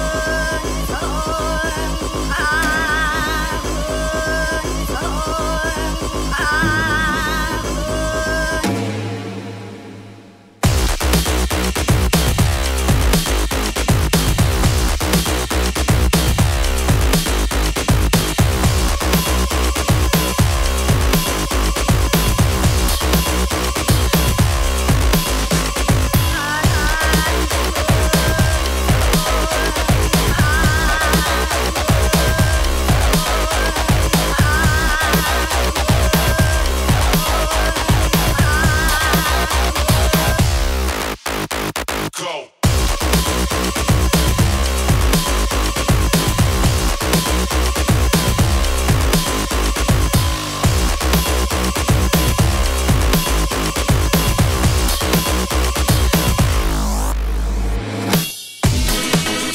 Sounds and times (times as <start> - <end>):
Dubstep: 0.0 - 59.5.